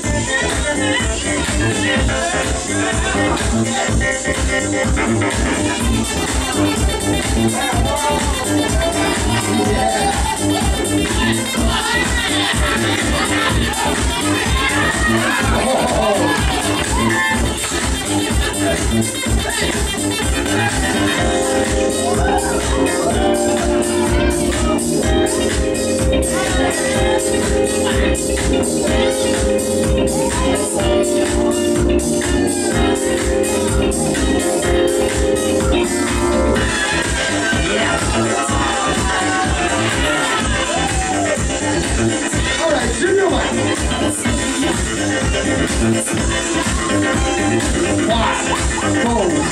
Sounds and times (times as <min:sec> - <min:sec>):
Music of Latin America: 0:00.0 - 0:49.5.